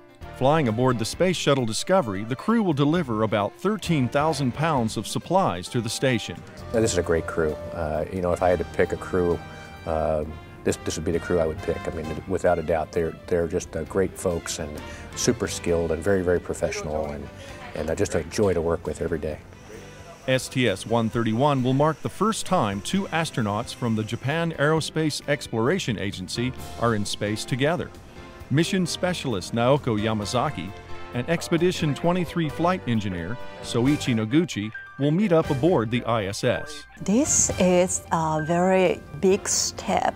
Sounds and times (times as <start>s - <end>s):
Music: 0.0s - 40.1s
Speech: 0.4s - 19.4s, 20.1s - 27.9s, 28.5s - 40.1s.